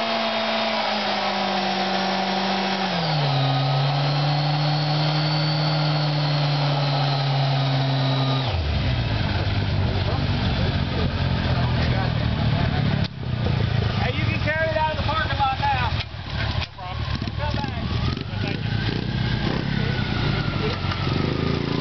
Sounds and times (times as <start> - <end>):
Race car, auto racing: 0.0 - 21.8
Speech: 9.9 - 18.8.